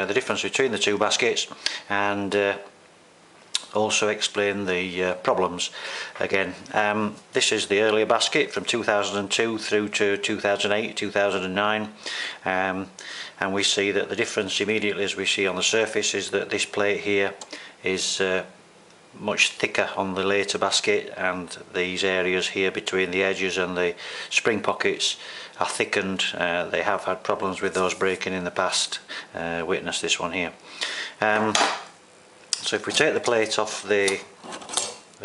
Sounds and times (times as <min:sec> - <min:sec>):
Speech: 0:00.0 - 0:02.8, 0:03.6 - 0:18.6, 0:19.2 - 0:30.6, 0:31.2 - 0:31.8, 0:32.6 - 0:35.2.